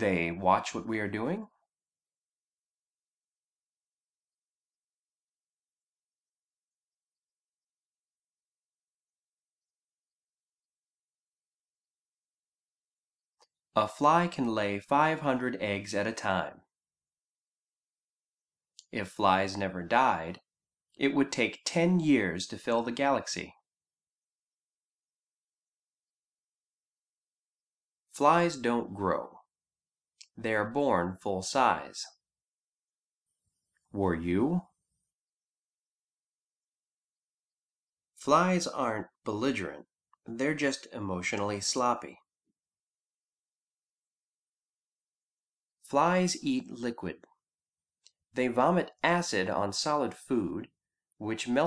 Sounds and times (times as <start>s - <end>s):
Speech: 0.0s - 1.6s, 13.8s - 16.7s, 18.8s - 20.4s, 21.0s - 23.6s, 28.2s - 29.5s, 30.2s - 32.2s, 33.9s - 34.7s, 38.2s - 42.3s, 45.9s - 47.3s, 48.4s - 51.6s.